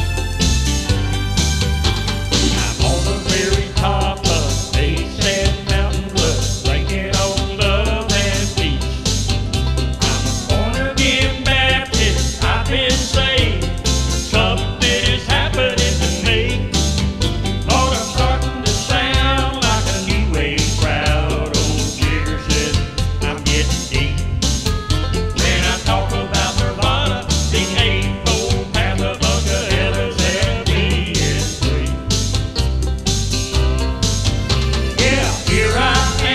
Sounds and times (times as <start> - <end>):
Happy music: 0.0 - 36.3.